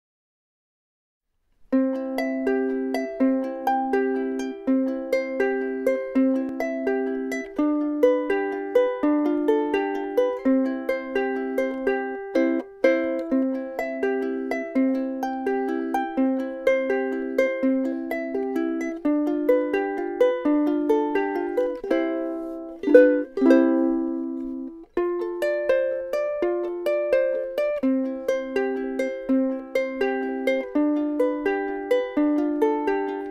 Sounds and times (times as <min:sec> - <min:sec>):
Pizzicato: 0:01.6 - 0:33.3.